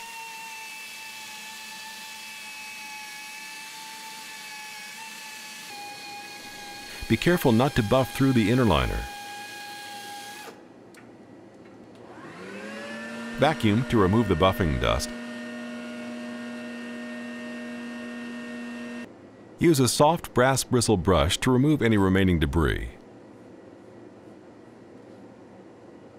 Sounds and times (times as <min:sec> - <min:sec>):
Speech: 0:07.0 - 0:09.1, 0:13.4 - 0:15.2, 0:19.6 - 0:23.0.